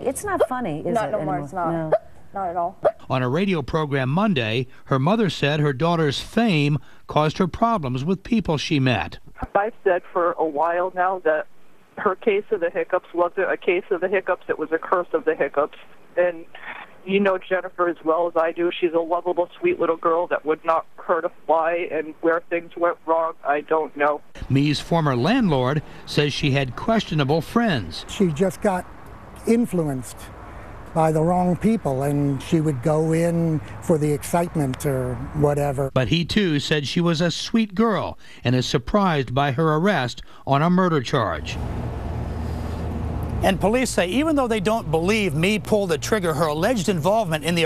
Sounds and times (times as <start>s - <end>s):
Speech: 0.0s - 28.8s, 29.4s - 30.3s, 31.0s - 41.6s, 43.4s - 47.6s.